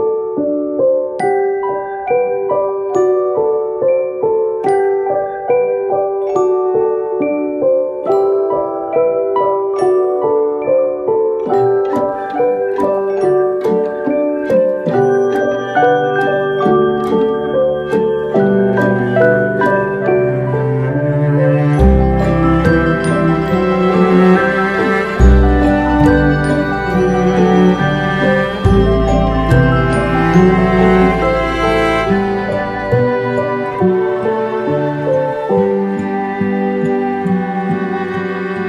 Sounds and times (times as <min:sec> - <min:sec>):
Music: 0:00.0 - 0:38.6.